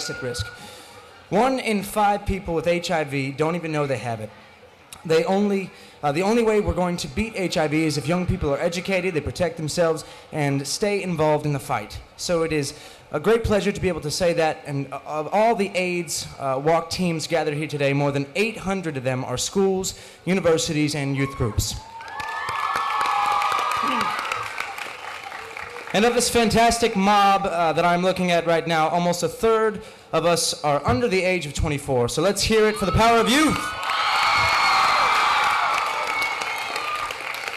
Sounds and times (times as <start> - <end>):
Speech: 0.0 - 0.5, 1.3 - 4.3, 5.0 - 21.8, 26.0 - 33.7.